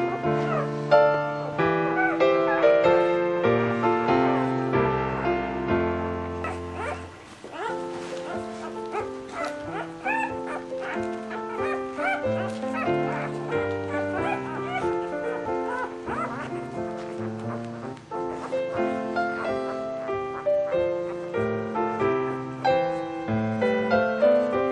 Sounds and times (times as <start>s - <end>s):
Music: 0.0s - 24.7s
Animal: 6.4s - 21.3s.